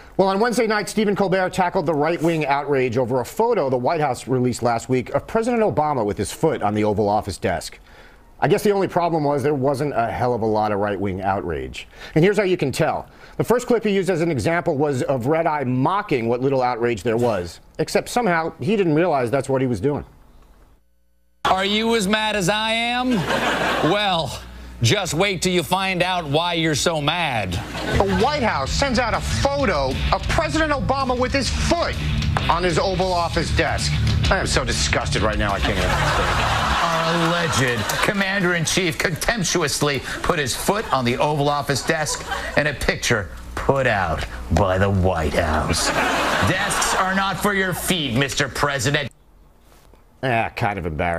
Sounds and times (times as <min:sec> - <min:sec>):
Speech: 0:00.2 - 0:07.8, 0:08.4 - 0:20.1, 0:21.5 - 0:23.2, 0:23.8 - 0:36.0, 0:36.8 - 0:49.1, 0:50.2 - 0:51.1.